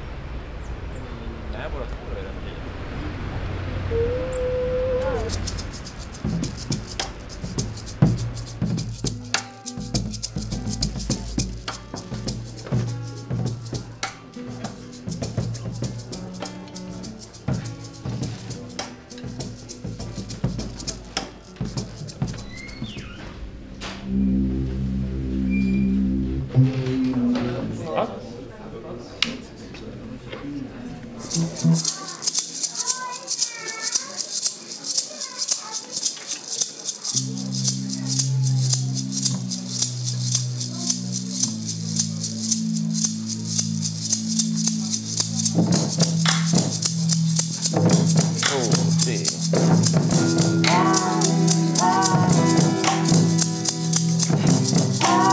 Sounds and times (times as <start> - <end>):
Music: 5.2 - 28.2, 31.2 - 33.4, 34.3 - 55.3.